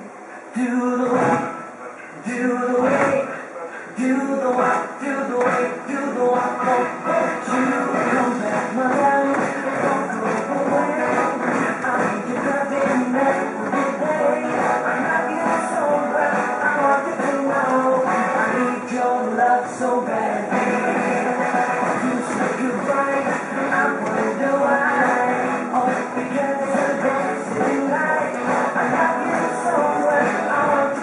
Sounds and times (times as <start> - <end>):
Music: 0.0 - 31.0.